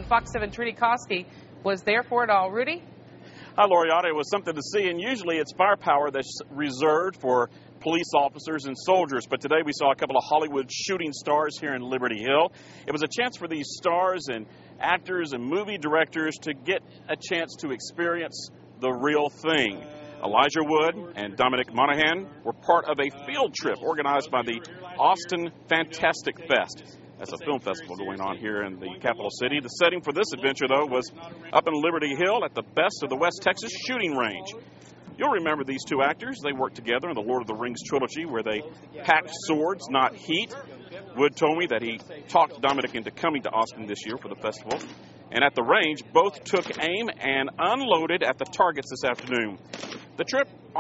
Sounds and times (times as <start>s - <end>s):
Speech: 0.0s - 2.8s, 3.6s - 50.8s.